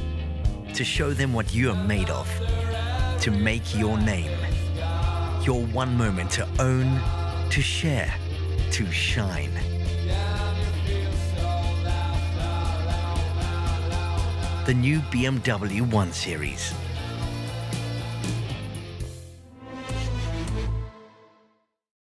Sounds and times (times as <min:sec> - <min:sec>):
Music: 0:00.0 - 0:21.9
Speech: 0:00.8 - 0:04.6, 0:05.4 - 0:09.7, 0:14.6 - 0:16.8.